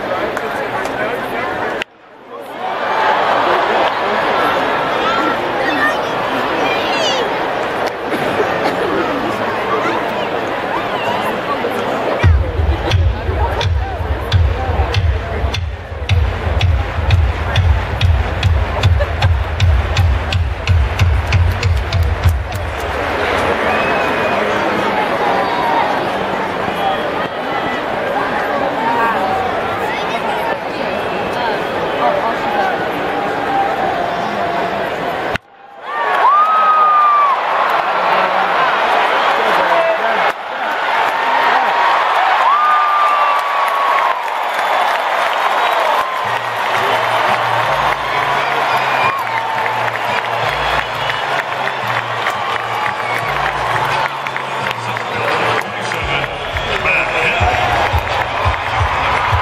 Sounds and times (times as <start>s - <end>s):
Speech: 0.0s - 2.6s, 3.4s - 16.1s, 21.6s - 35.0s, 37.8s - 40.5s, 54.1s - 59.4s.